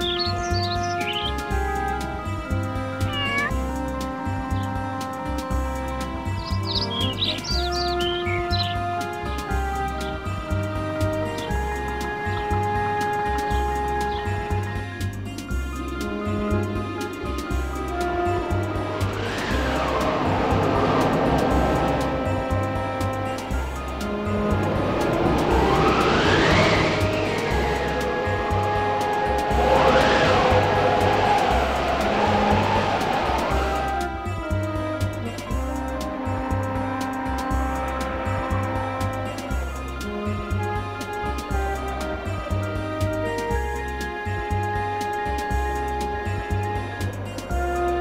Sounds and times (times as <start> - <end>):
Music: 0.0 - 48.0.